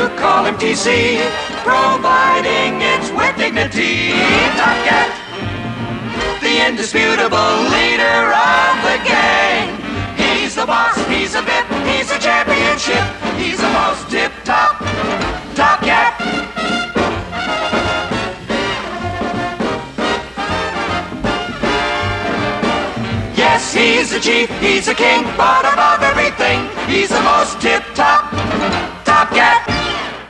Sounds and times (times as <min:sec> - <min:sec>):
Music: 0:00.0 - 0:30.2.